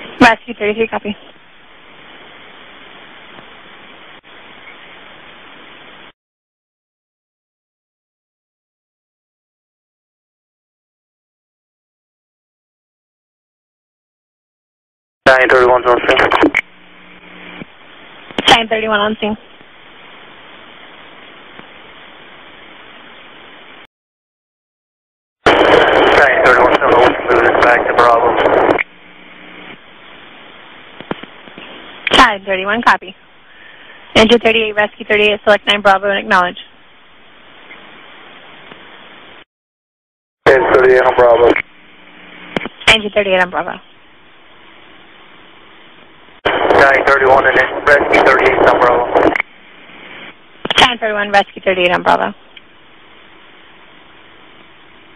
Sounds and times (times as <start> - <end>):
Speech: 0.2 - 1.3, 15.3 - 16.6, 18.4 - 19.4, 25.8 - 28.6, 32.1 - 33.2, 34.2 - 36.7, 40.5 - 41.6, 42.8 - 43.8, 46.5 - 49.4, 50.7 - 52.4.